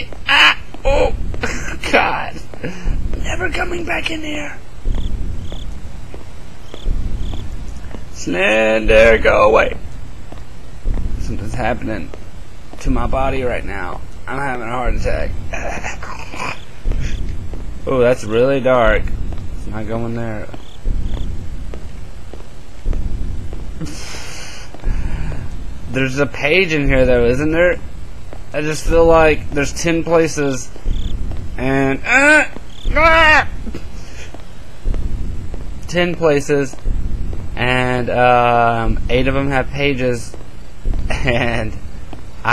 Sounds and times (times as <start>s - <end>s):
Speech: 0.0s - 1.2s, 3.2s - 4.6s, 8.2s - 9.8s, 11.2s - 12.1s, 12.8s - 15.3s, 17.9s - 20.5s, 25.9s - 27.8s, 28.6s - 30.7s, 31.6s - 33.6s, 35.9s - 36.8s, 37.6s - 40.3s.